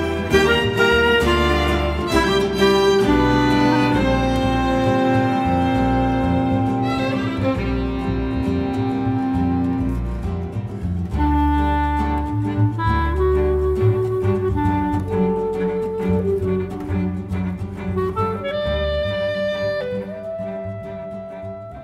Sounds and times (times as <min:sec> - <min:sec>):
Cello: 0:00.0 - 0:21.8
Double bass: 0:00.0 - 0:21.8.